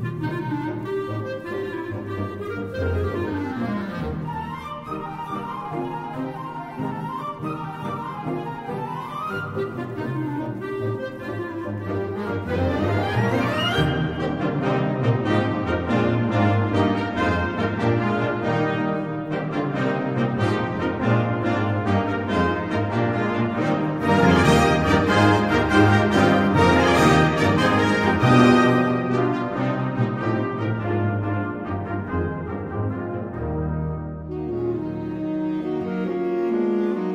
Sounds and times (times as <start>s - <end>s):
Brass instrument: 0.0s - 37.1s.